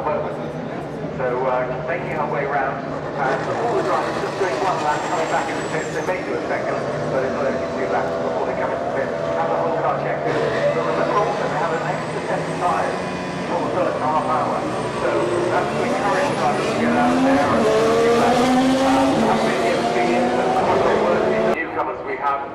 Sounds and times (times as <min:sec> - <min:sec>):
Speech: 0:00.0 - 0:22.5.